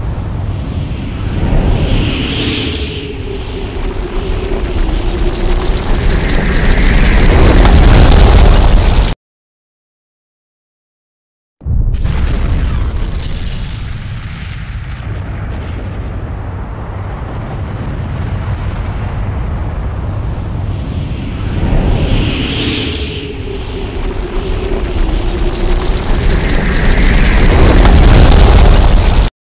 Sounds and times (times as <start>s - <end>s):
Explosion: 0.0s - 9.2s, 11.6s - 29.3s.